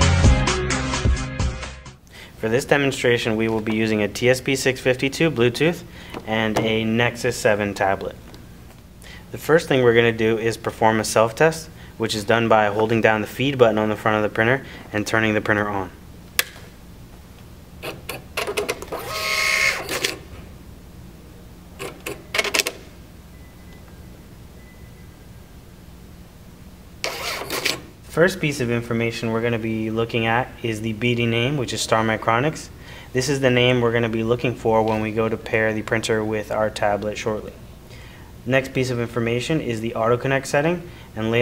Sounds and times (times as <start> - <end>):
Speech: 2.4 - 8.2, 9.3 - 16.0, 28.1 - 37.6, 38.5 - 41.4
Printer: 17.8 - 20.2, 21.8 - 22.8, 27.0 - 27.9.